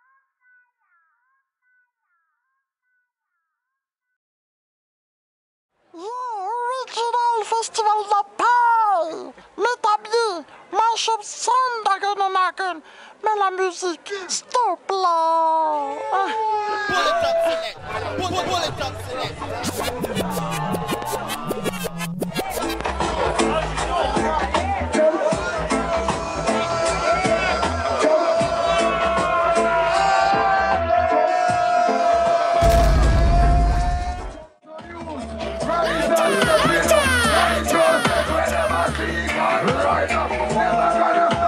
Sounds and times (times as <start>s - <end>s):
Speech: 6.0s - 22.7s
Crowd: 15.2s - 41.4s
Music: 17.0s - 41.4s.